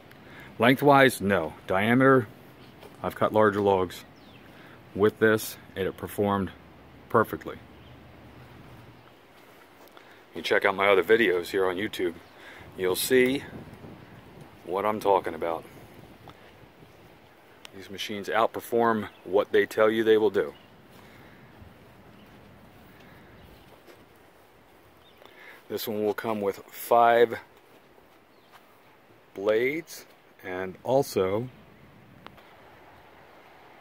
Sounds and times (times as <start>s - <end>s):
Speech: 0.6s - 2.3s, 3.0s - 4.1s, 4.9s - 7.6s, 10.3s - 12.2s, 12.8s - 13.6s, 14.6s - 15.7s, 17.7s - 20.6s, 25.7s - 27.5s, 29.3s - 31.6s.